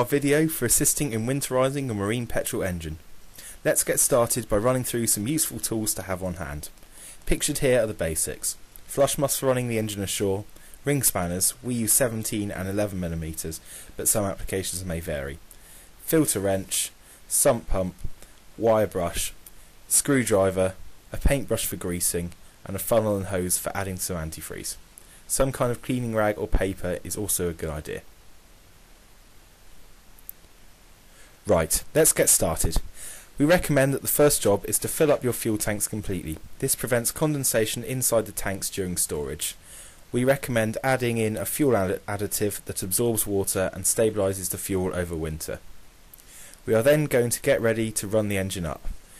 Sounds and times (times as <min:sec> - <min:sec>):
Speech: 0:00.0 - 0:03.0, 0:03.6 - 0:15.4, 0:16.0 - 0:28.1, 0:31.4 - 0:45.6, 0:46.6 - 0:49.0.